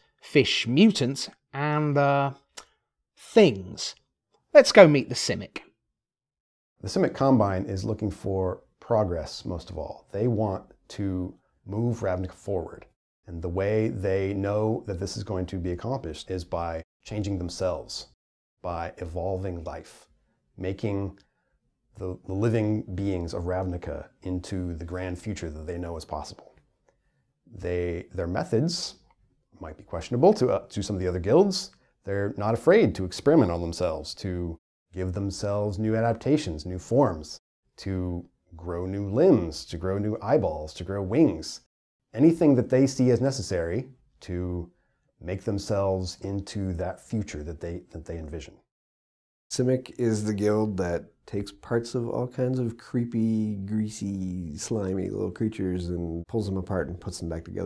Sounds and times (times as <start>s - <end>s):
Speech: 0.0s - 5.8s, 6.8s - 21.2s, 22.0s - 26.6s, 27.5s - 29.0s, 29.6s - 48.7s, 49.5s - 57.6s.